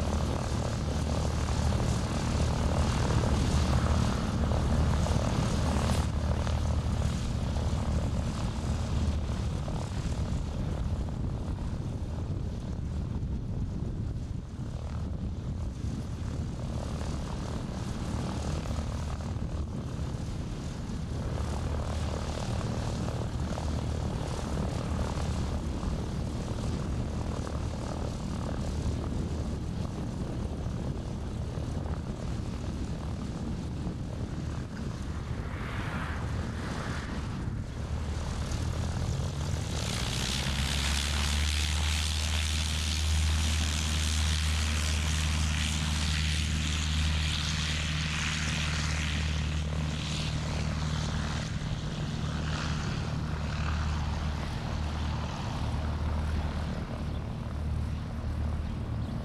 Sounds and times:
Fixed-wing aircraft, airplane: 0:00.0 - 0:59.2
Outside, rural or natural: 0:00.0 - 0:59.2.

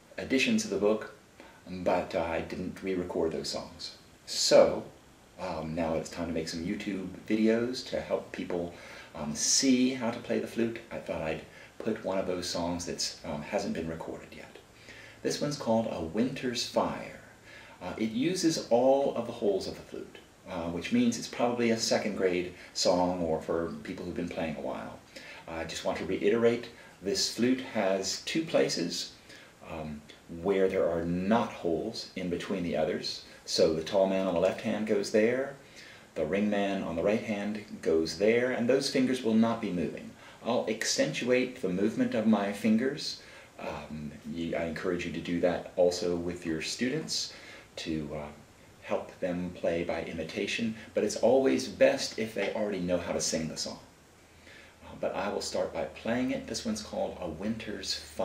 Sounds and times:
Speech: 0:00.0 - 0:53.9, 0:54.8 - 0:58.2.

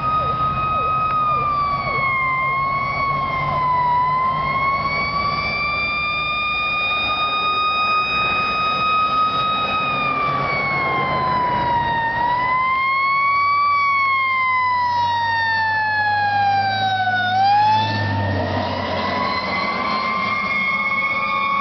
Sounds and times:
Accelerating, revving, vroom: 0:00.0 - 0:13.9, 0:14.7 - 0:21.6
Vehicle: 0:00.0 - 0:21.6.

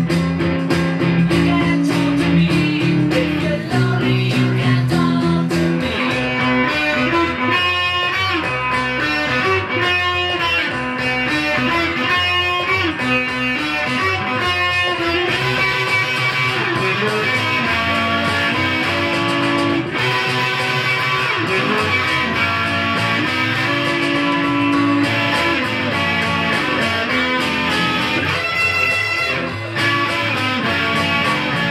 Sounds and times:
Electric guitar: 0:00.0 - 0:31.7
Strum: 0:00.0 - 0:31.7.

